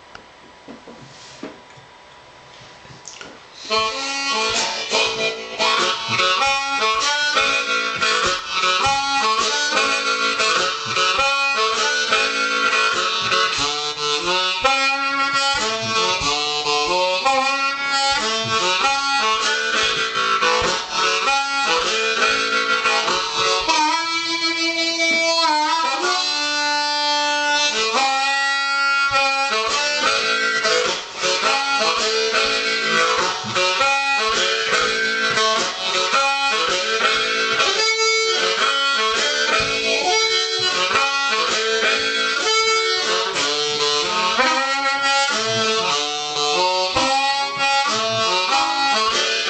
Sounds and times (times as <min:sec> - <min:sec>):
Music: 0:03.5 - 0:49.4.